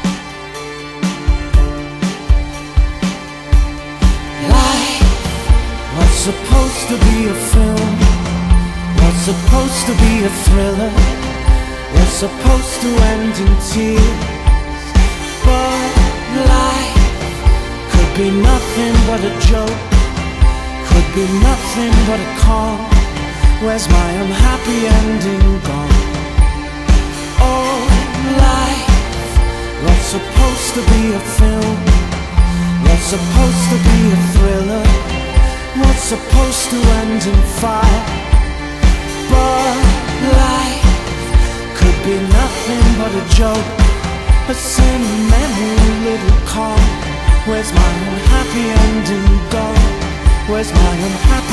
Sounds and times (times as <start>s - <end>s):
Music: 0.0s - 51.5s.